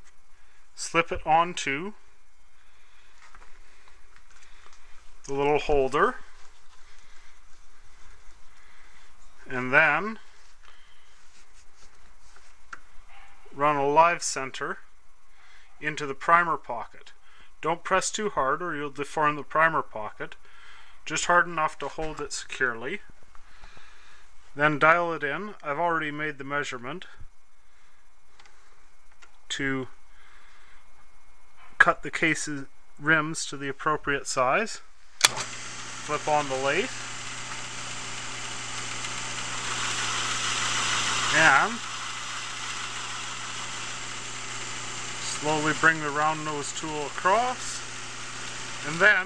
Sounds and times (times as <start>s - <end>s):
Speech: 0.8s - 2.0s, 5.3s - 6.3s, 9.5s - 10.3s, 13.5s - 14.9s, 15.8s - 20.4s, 21.1s - 23.1s, 24.6s - 27.2s, 29.5s - 30.0s, 31.8s - 34.9s, 36.1s - 37.0s, 41.3s - 41.9s, 45.2s - 47.9s, 48.8s - 49.2s.